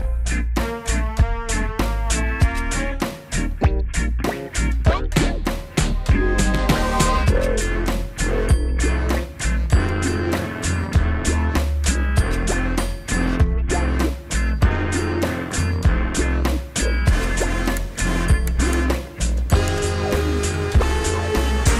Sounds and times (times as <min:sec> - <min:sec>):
Music: 0:00.0 - 0:21.7.